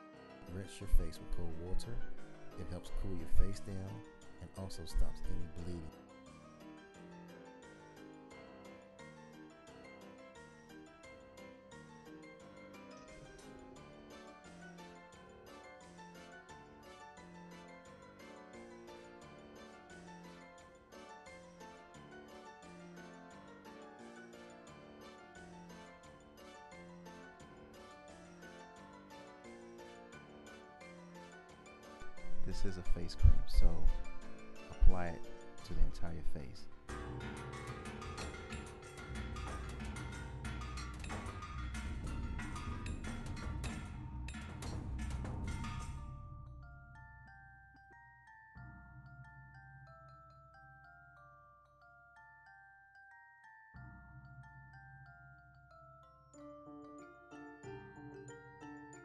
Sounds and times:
Marimba, xylophone: 0:00.0 - 0:36.0, 0:36.6 - 0:59.0
Glockenspiel: 0:00.0 - 0:59.0.

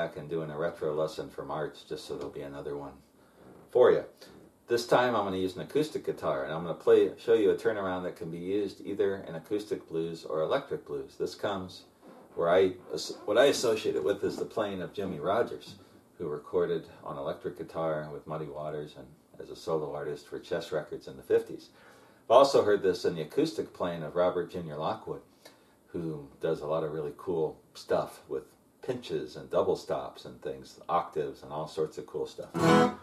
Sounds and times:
Speech: 0:00.0 - 0:03.1, 0:03.7 - 0:25.3, 0:25.9 - 0:32.6.

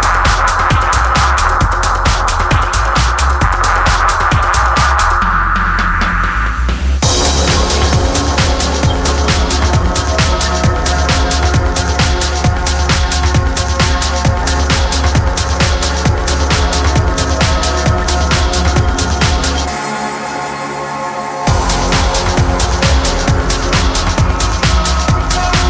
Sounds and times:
Music: 0:00.0 - 0:25.7.

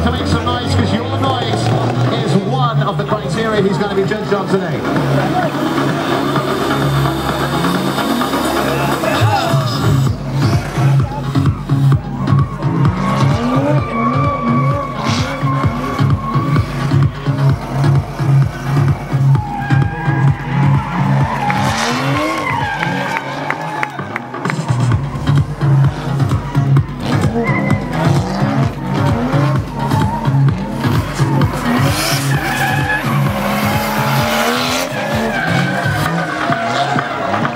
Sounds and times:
Music: 0:00.0 - 0:37.5
Skidding: 0:00.0 - 0:37.5.

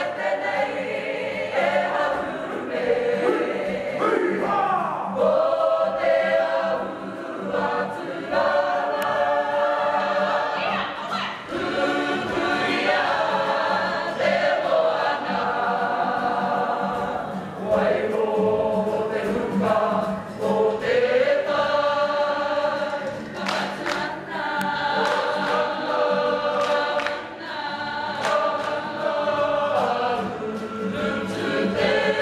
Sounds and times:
Choir: 0:00.0 - 0:32.2.

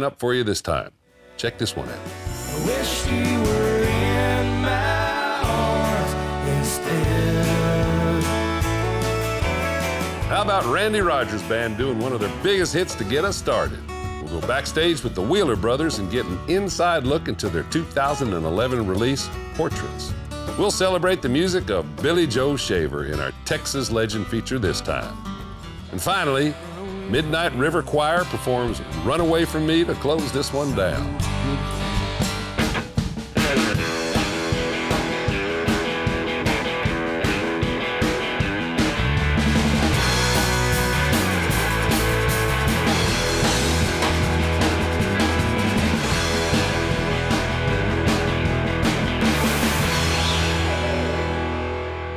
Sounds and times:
Speech: 0:00.0 - 0:03.0, 0:10.3 - 0:25.2, 0:25.9 - 0:31.7
Music: 0:01.0 - 0:52.1.

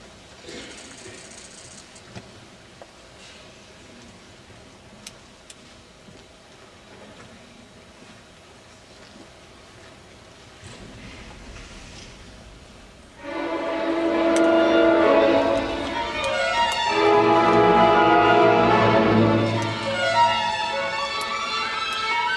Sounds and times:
Violin, fiddle: 0:13.2 - 0:22.3.

